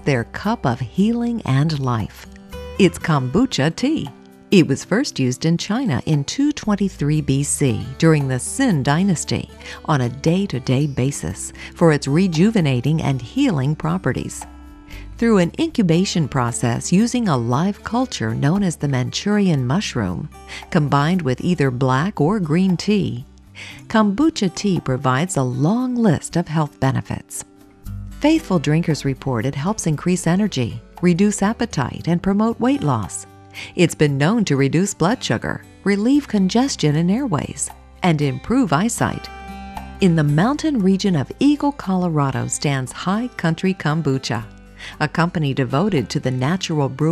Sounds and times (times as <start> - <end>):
Speech: 0.0 - 27.4, 28.2 - 39.3, 40.0 - 47.1
Music: 0.0 - 47.1.